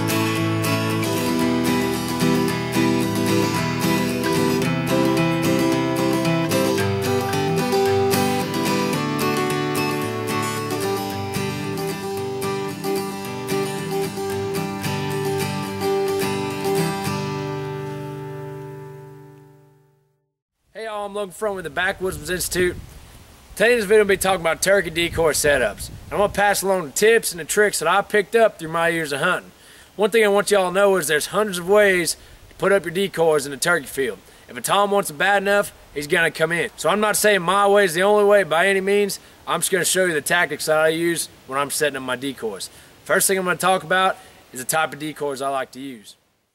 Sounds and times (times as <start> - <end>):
Music: 0.0 - 20.2.